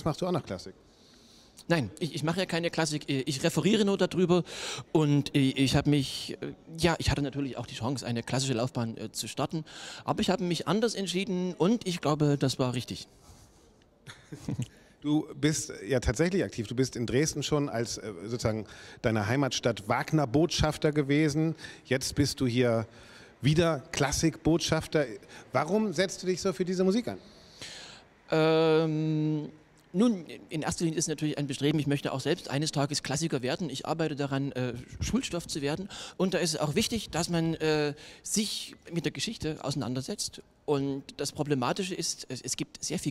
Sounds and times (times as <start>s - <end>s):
Speech: 0.0s - 0.8s, 1.6s - 4.4s, 5.0s - 13.1s, 15.0s - 27.2s, 28.3s - 43.1s.